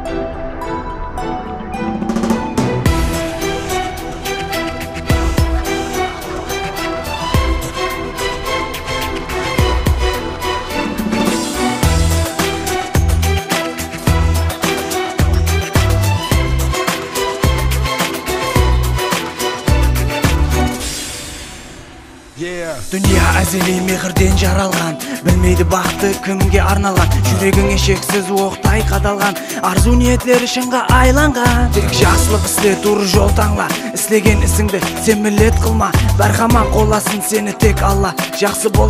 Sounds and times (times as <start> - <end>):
Soundtrack music: 0.0 - 38.8.